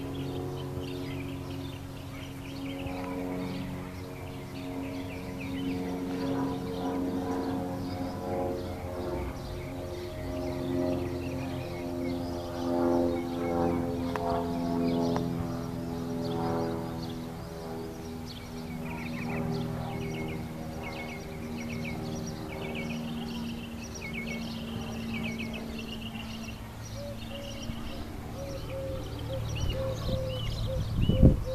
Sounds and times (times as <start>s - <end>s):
Vehicle: 0.0s - 31.5s.